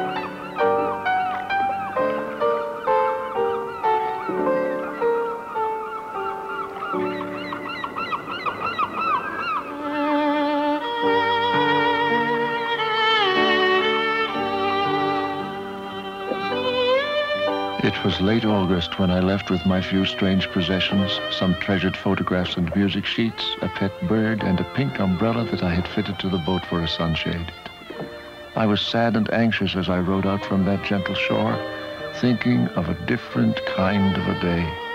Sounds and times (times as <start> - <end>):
Violin, fiddle: 0.0 - 34.9
Speech: 17.8 - 27.7, 28.6 - 31.6, 32.2 - 34.8.